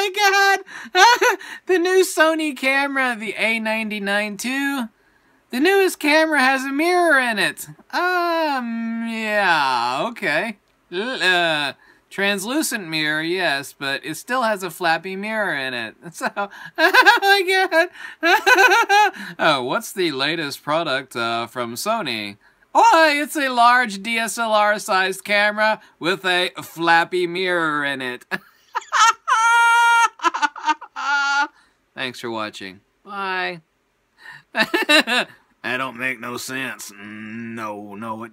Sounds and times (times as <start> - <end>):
Speech: 35.7 - 38.3.